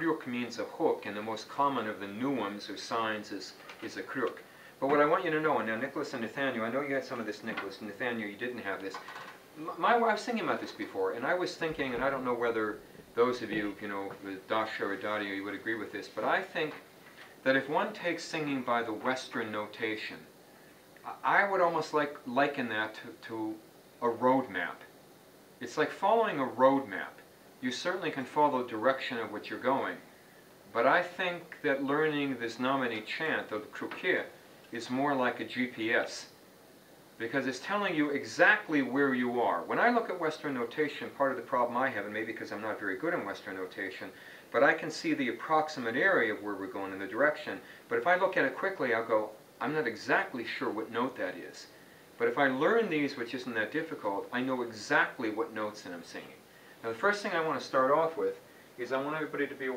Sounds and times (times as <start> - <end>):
Speech: 0.0 - 20.3, 21.0 - 24.9, 25.6 - 30.1, 30.7 - 36.4, 37.2 - 59.7.